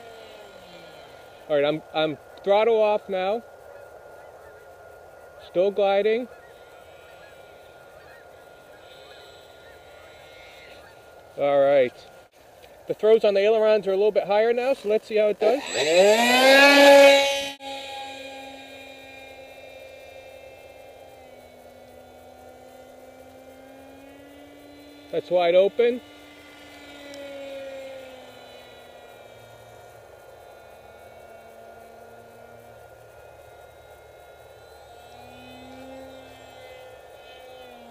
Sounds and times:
Vehicle: 0.0s - 37.9s.

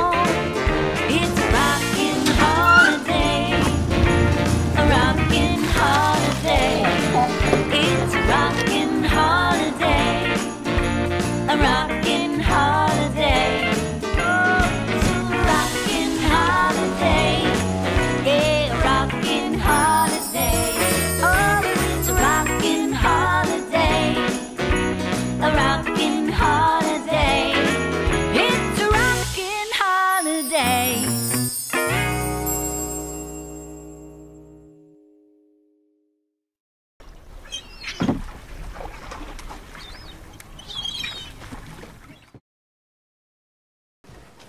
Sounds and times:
Music: 0.0s - 35.8s
Bird: 2.6s - 3.1s, 37.1s - 38.2s, 38.9s - 42.4s.

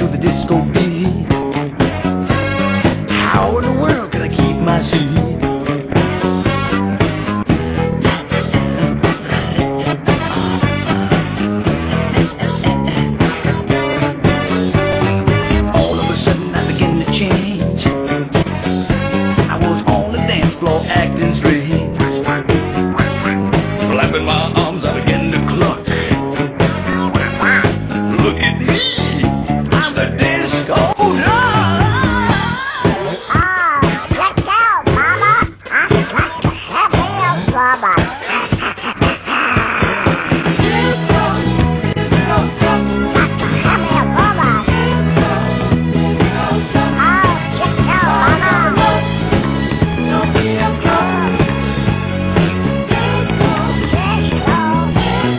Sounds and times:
Disco: 0.0s - 55.3s.

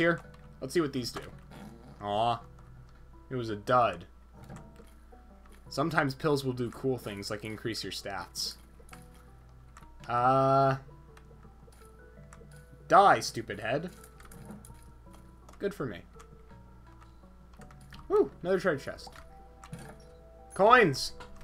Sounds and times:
Speech: 0.0s - 1.3s, 5.7s - 8.6s, 12.9s - 14.0s, 15.6s - 16.1s, 18.1s - 19.1s, 20.6s - 21.2s
Music: 0.0s - 21.4s.

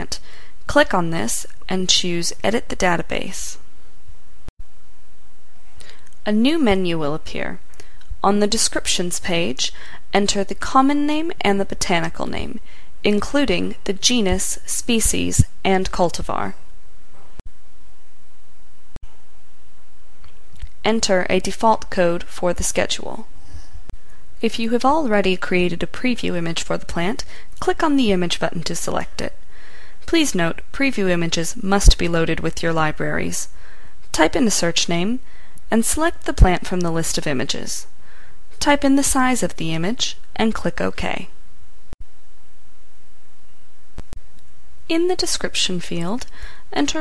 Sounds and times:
Speech: 0.0s - 3.6s, 6.2s - 7.6s, 8.2s - 16.6s, 20.8s - 23.3s, 24.4s - 29.4s, 30.1s - 37.9s, 38.6s - 41.3s, 44.9s - 47.0s.

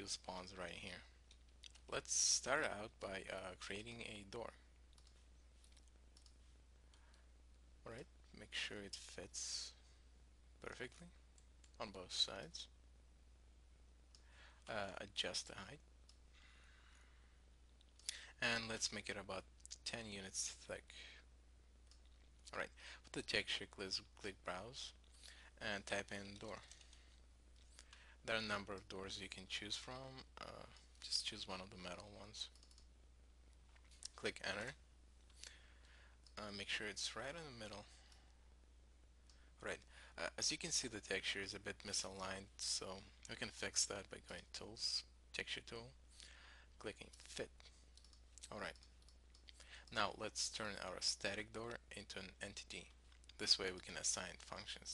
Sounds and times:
Speech: 0.0s - 1.1s, 1.9s - 4.6s, 7.8s - 9.8s, 10.6s - 11.2s, 11.8s - 12.7s, 14.7s - 15.8s, 18.1s - 21.2s, 22.5s - 25.0s, 25.6s - 26.7s, 28.2s - 32.6s, 34.1s - 34.8s, 36.4s - 38.0s, 39.6s - 46.0s, 46.8s - 47.7s, 48.4s - 48.8s, 49.9s - 54.9s.

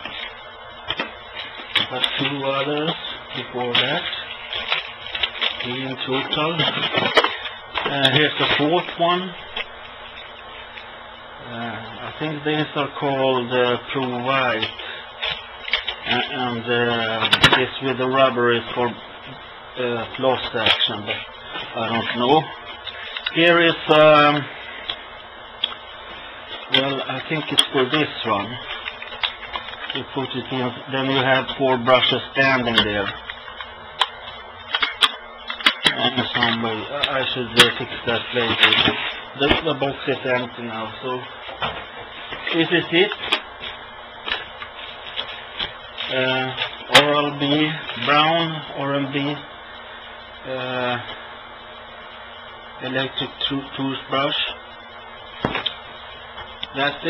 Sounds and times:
Speech: 1.8s - 4.2s, 5.6s - 6.9s, 7.8s - 9.4s, 11.4s - 14.8s, 16.0s - 22.5s, 23.3s - 24.5s, 26.7s - 28.7s, 29.9s - 33.2s, 35.8s - 41.3s, 42.5s - 43.2s, 46.0s - 49.5s, 50.4s - 51.2s, 52.8s - 54.6s, 56.7s - 57.0s.

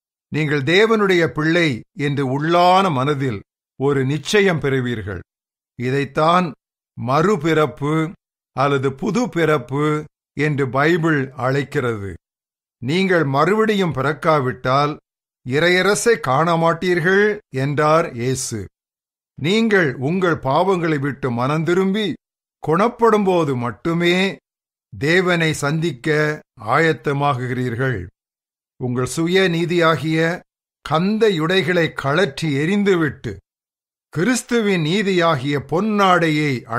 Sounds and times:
Speech synthesizer: 25.0s - 28.1s.

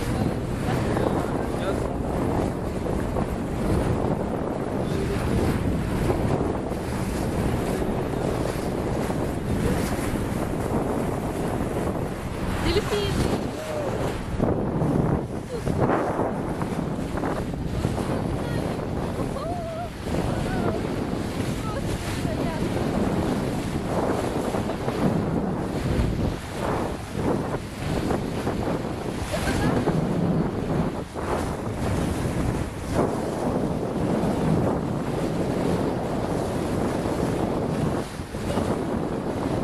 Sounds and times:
Motorboat, speedboat: 0.0s - 39.6s.

